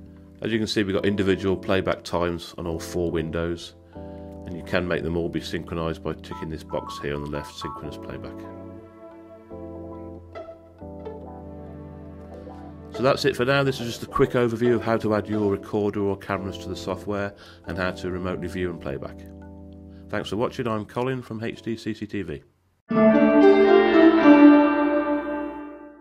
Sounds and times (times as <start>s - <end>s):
Music: 0.0s - 21.9s, 22.9s - 26.0s
Speech: 0.4s - 3.8s, 4.5s - 8.5s, 13.0s - 19.3s, 20.1s - 22.5s.